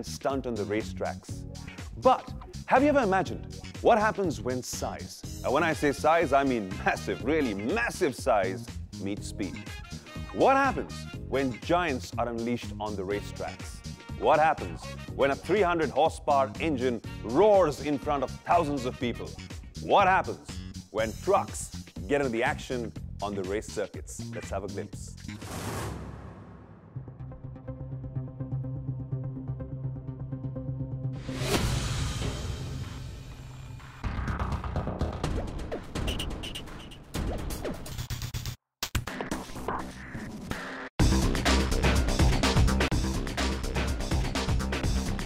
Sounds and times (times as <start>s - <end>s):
Speech: 0.0s - 1.3s, 2.0s - 9.6s, 10.4s - 25.2s
Music: 0.0s - 45.2s.